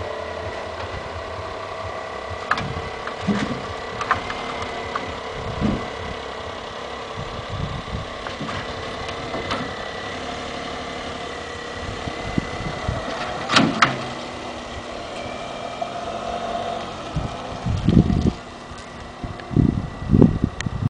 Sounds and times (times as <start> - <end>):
Car: 0.0 - 20.8.